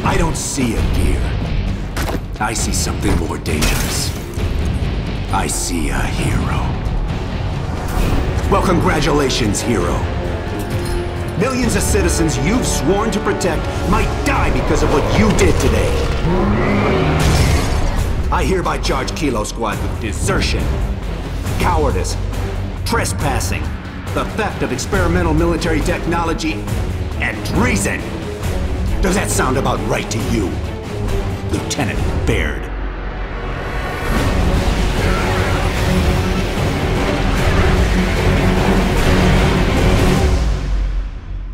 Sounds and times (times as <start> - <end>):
Speech: 0.0 - 1.4, 2.4 - 4.1, 5.3 - 6.8, 8.5 - 10.1, 11.4 - 16.0, 18.3 - 20.7, 21.6 - 22.2, 22.9 - 26.6, 27.2 - 28.1, 29.0 - 30.6, 31.5 - 32.8
Music: 0.0 - 41.5.